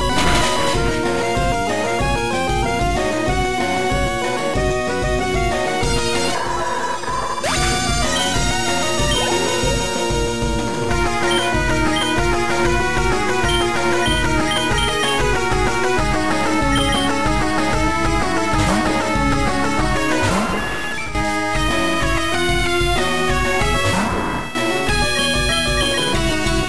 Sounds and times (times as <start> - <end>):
Music: 0.0 - 26.6.